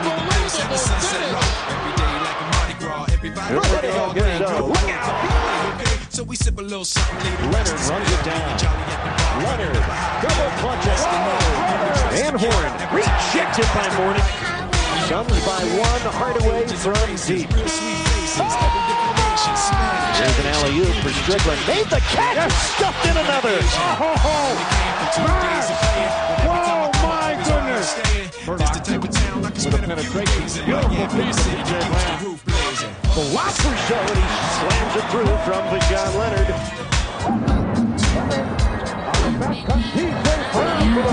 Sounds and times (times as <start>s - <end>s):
Exciting music: 0.0s - 41.1s
Speech: 3.4s - 5.1s, 7.4s - 8.6s, 9.4s - 29.0s, 29.6s - 36.6s, 39.6s - 41.1s.